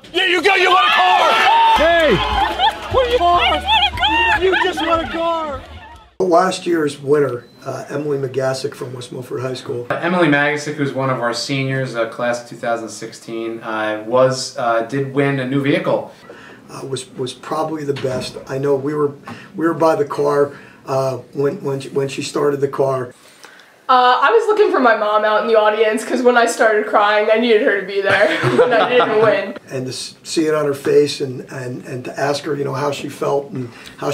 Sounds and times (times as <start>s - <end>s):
Speech: 16.7s - 23.1s.